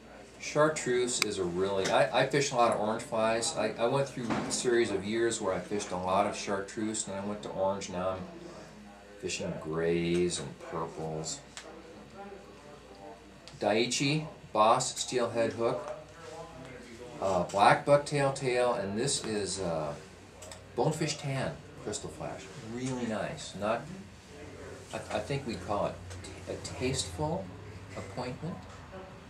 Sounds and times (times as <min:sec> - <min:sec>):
Speech: 0:00.0 - 0:29.2.